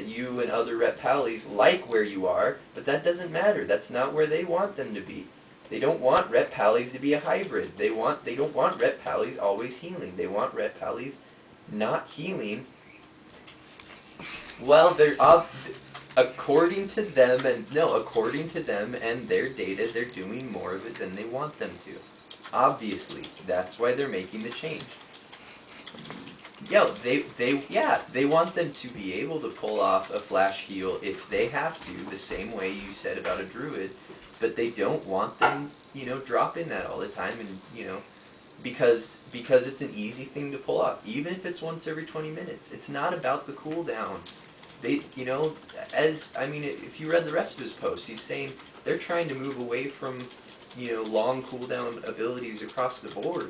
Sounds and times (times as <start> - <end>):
Speech: 0.0 - 12.7, 14.6 - 25.0, 26.6 - 53.5.